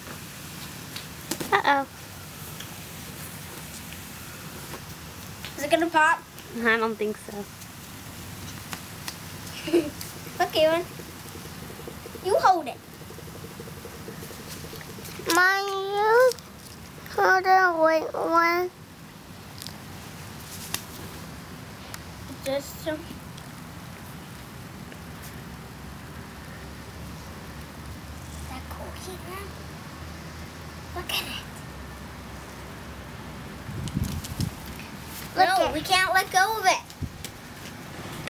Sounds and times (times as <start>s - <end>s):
Child speech, kid speaking: 1.6s - 1.9s, 5.6s - 7.5s, 9.7s - 10.9s, 12.2s - 12.8s, 15.3s - 16.4s, 17.1s - 18.8s, 22.3s - 23.2s, 28.4s - 29.6s, 31.0s - 31.6s, 35.4s - 36.9s.